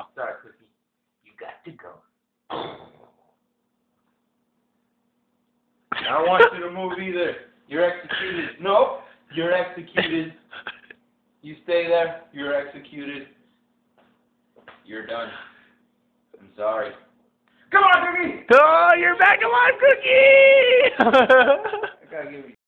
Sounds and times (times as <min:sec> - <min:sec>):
Speech: 0:01.3 - 0:02.1, 0:17.7 - 0:20.3, 0:22.0 - 0:22.6.